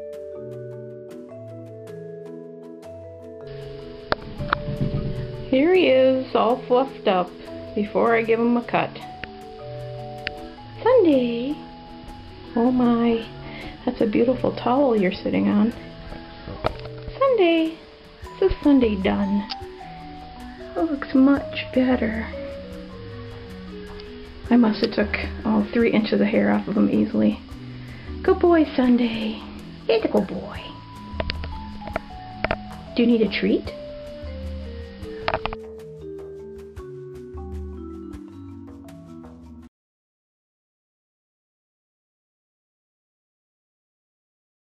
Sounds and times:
Music: 0.0 - 39.7
Speech: 5.5 - 9.0, 10.8 - 11.6, 12.5 - 15.8, 17.2 - 17.8, 18.4 - 19.5, 20.8 - 22.4, 24.5 - 27.4, 28.2 - 30.8, 33.0 - 33.8.

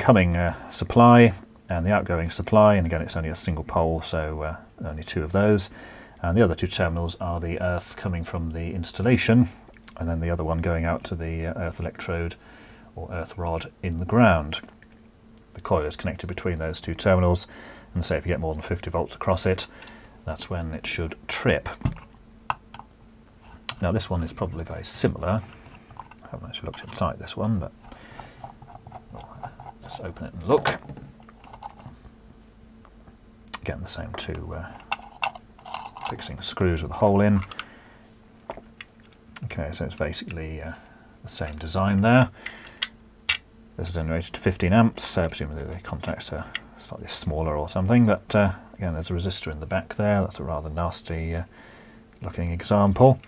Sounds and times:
Speech: 0.0 - 12.4, 13.0 - 14.7, 15.6 - 22.0, 23.7 - 25.5, 26.2 - 27.8, 29.2 - 30.9, 33.5 - 34.8, 36.0 - 37.5, 39.4 - 42.4, 43.8 - 51.5, 52.2 - 53.2
Inside, small room: 0.0 - 53.2.

